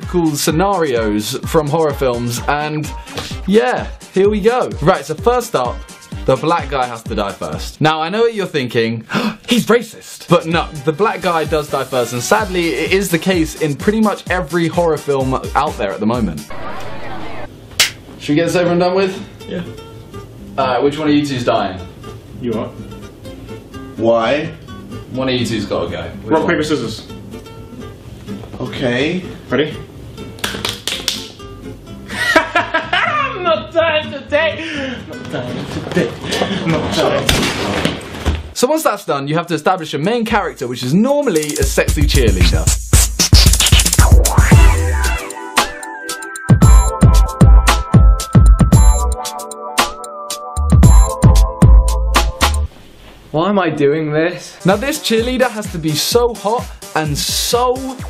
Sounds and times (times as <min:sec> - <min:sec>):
Speech: 0:00.0 - 0:02.9, 0:03.5 - 0:16.4, 0:18.2 - 0:19.7, 0:20.6 - 0:21.8, 0:25.2 - 0:27.1, 0:28.6 - 0:29.8, 0:35.3 - 0:37.9, 0:38.6 - 0:42.7, 0:53.3 - 0:58.0
Music: 0:00.0 - 0:52.7, 0:54.3 - 0:58.0.